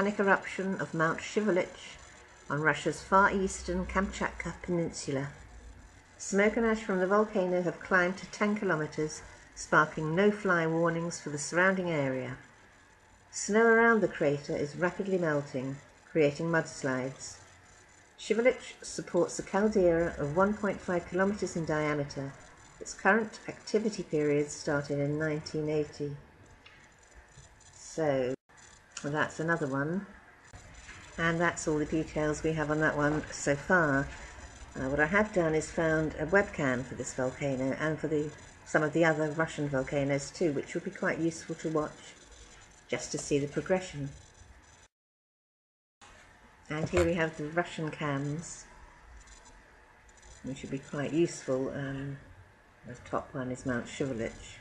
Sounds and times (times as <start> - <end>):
Speech: 0.0 - 5.4, 6.2 - 12.4, 13.4 - 17.4, 18.2 - 26.2, 27.8 - 28.4, 29.0 - 30.1, 31.2 - 34.2, 34.8 - 42.2, 42.9 - 44.2, 46.7 - 48.7, 50.5 - 52.2, 52.9 - 54.6.